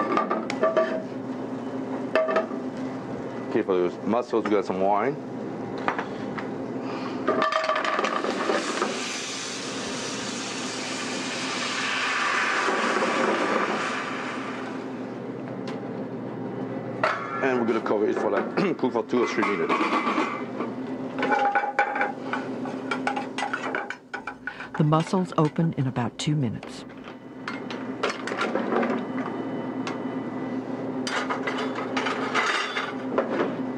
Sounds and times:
Speech: 3.5 - 5.2, 17.4 - 19.8, 24.8 - 26.9.

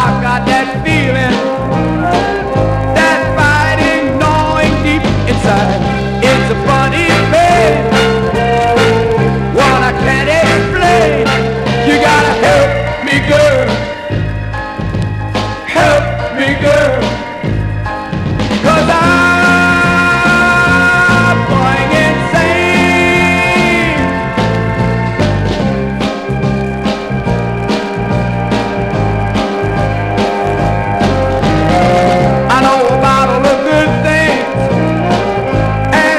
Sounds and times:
Ska: 0.0 - 36.1.

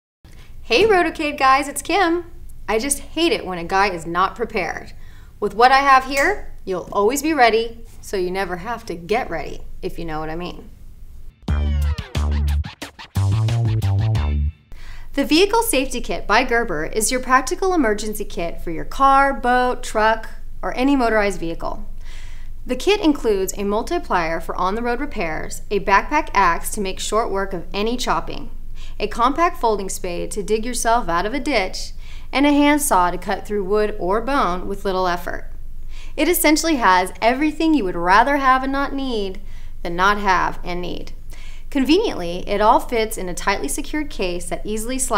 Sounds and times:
Speech: 0.7 - 10.7, 15.2 - 21.8, 22.7 - 35.5, 36.2 - 45.1.

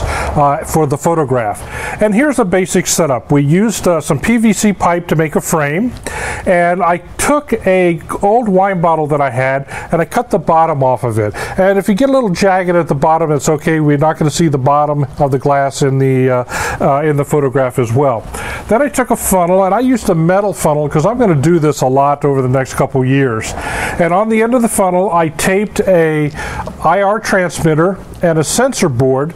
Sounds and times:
Speech: 0.0 - 29.3.

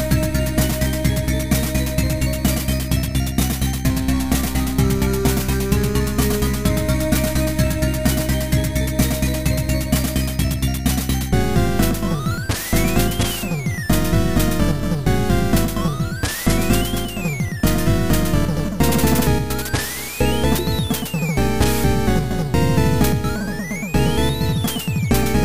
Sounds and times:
Video game music: 0.0 - 25.4.

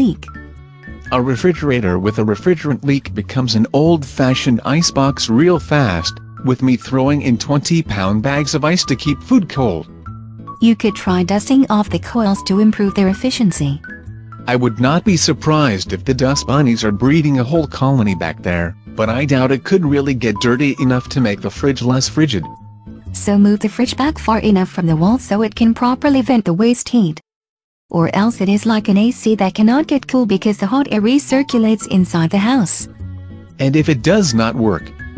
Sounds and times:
Speech: 0.0 - 0.3, 1.1 - 9.9, 10.6 - 13.8, 14.5 - 22.5, 23.2 - 27.2, 27.9 - 32.9, 33.6 - 35.1
Music: 0.0 - 27.2, 27.9 - 35.1.

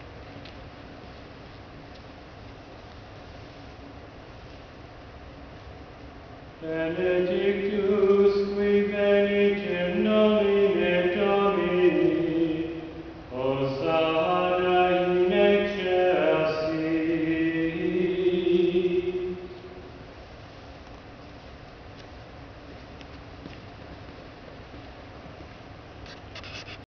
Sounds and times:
Mantra: 6.6 - 19.9.

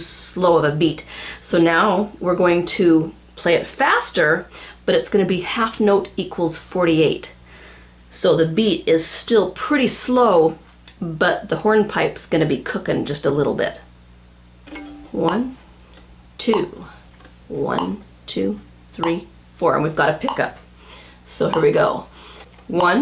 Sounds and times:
Speech: 0.0 - 7.4, 8.1 - 13.9, 15.1 - 15.6, 16.4 - 20.6, 21.3 - 22.1, 22.7 - 23.0.

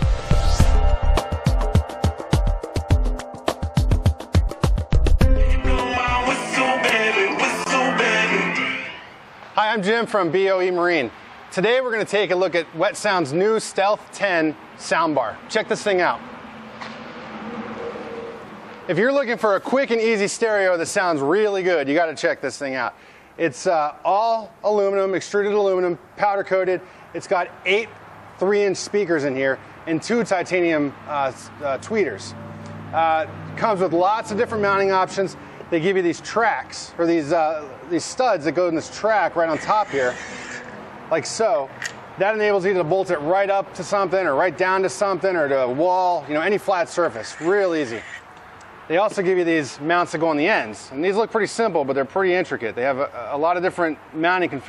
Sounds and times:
Speech: 9.6 - 16.2, 18.9 - 32.4, 33.0 - 40.2, 41.1 - 48.1, 48.9 - 54.6.

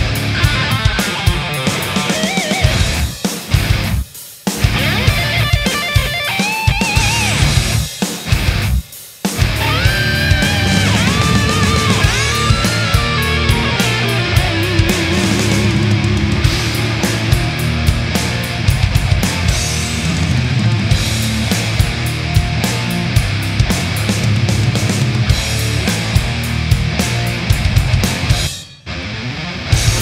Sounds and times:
Heavy metal: 0.0 - 30.0.

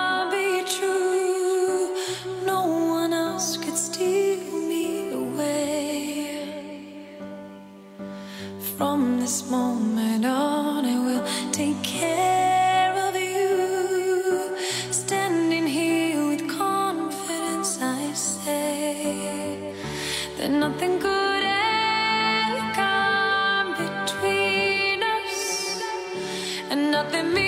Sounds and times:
Music: 0.0 - 27.4.

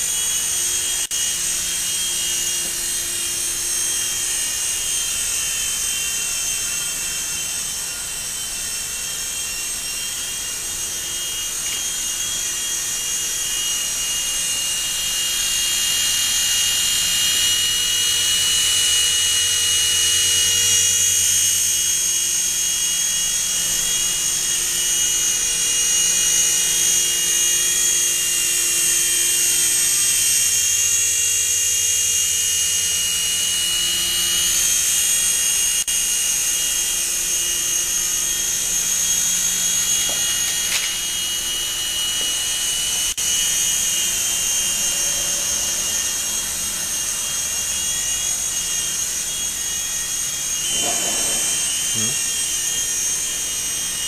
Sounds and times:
Helicopter: 0.0 - 54.0.

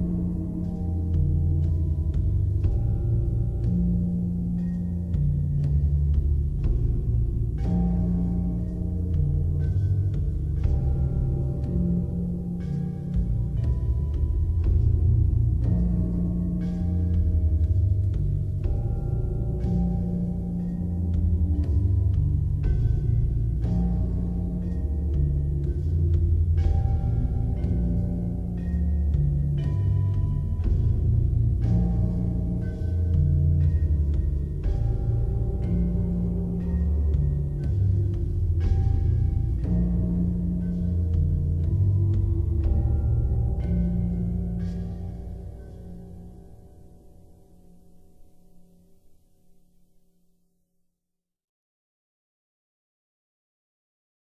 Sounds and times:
Music: 0.0 - 51.2.

